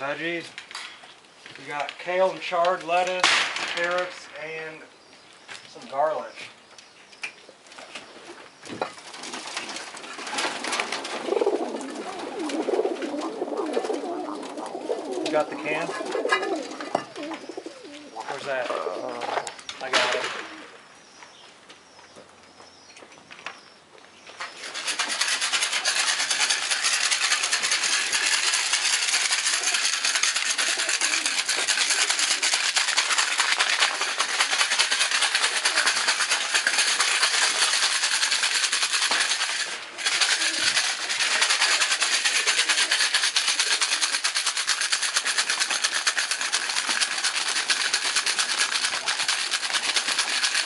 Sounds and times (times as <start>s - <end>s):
Pigeon, dove: 8.0s - 20.7s, 24.4s - 50.6s.